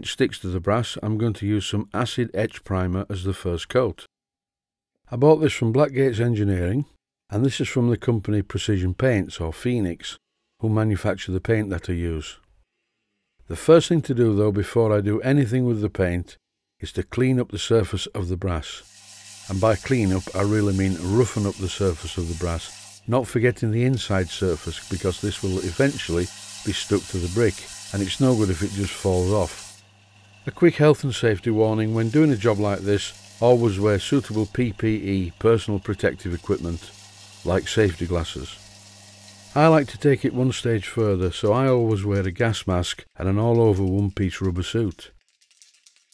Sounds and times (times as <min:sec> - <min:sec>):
Speech: 0:00.0 - 0:04.1, 0:05.1 - 0:12.4, 0:13.5 - 0:18.8, 0:19.5 - 0:29.6, 0:30.5 - 0:38.6, 0:39.6 - 0:45.2.